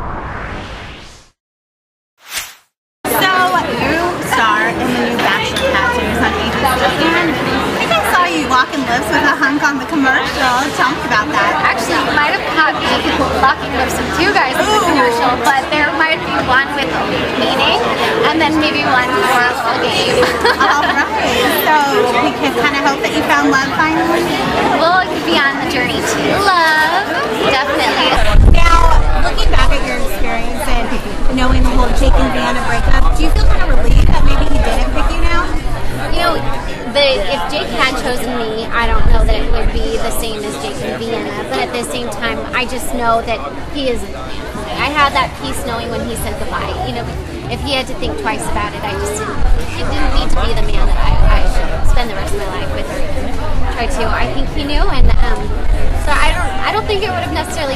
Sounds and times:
Speech: 0:03.1 - 0:57.7.

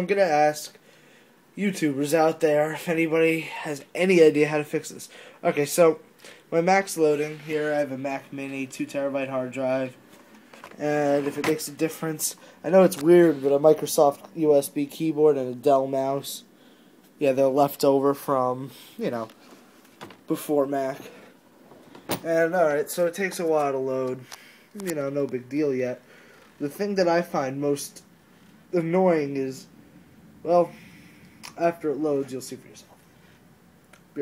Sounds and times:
Speech: 0:00.0 - 0:00.8, 0:01.6 - 0:10.0, 0:10.8 - 0:16.5, 0:17.2 - 0:19.4, 0:20.3 - 0:21.3, 0:22.2 - 0:26.0, 0:26.6 - 0:28.0, 0:28.7 - 0:29.7, 0:30.5 - 0:30.8, 0:31.6 - 0:32.9.

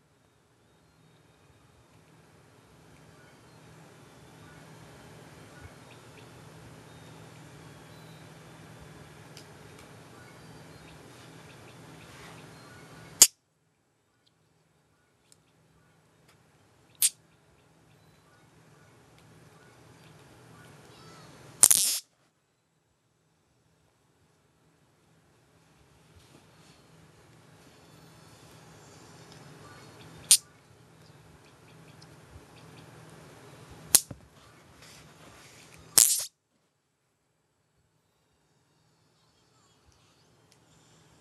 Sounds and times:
Zing: 0:21.6 - 0:22.0, 0:36.0 - 0:36.3.

